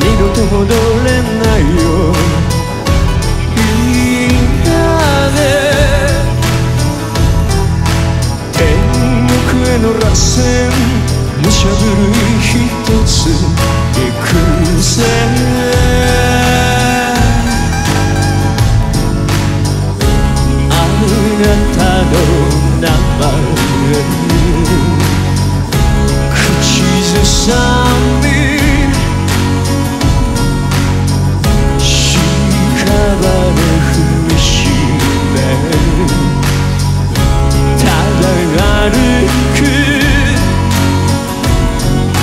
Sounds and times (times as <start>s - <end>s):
Music: 0.0s - 42.2s.